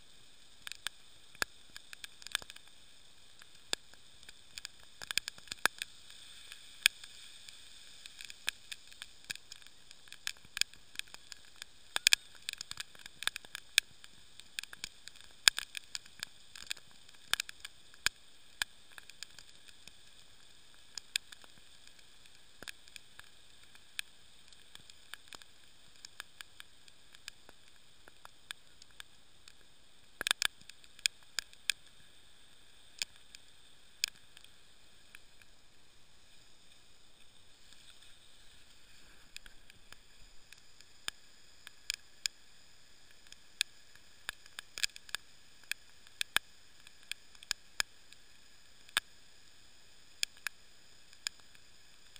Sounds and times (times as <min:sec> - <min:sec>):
Stream: 0:00.0 - 0:52.1.